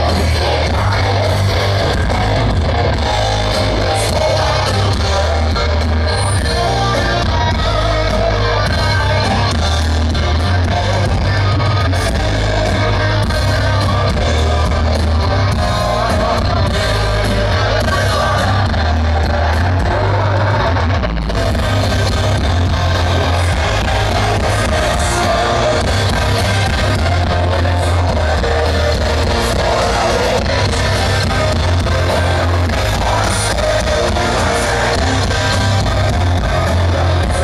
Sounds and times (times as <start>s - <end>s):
Music: 0.0s - 37.4s.